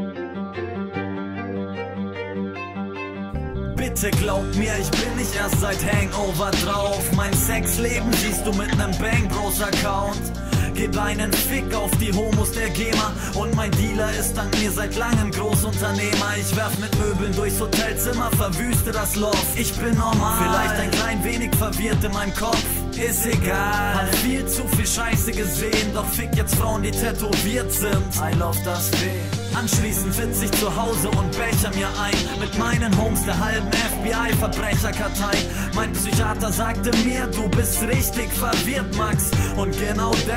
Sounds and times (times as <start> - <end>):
Music: 0.0 - 40.3.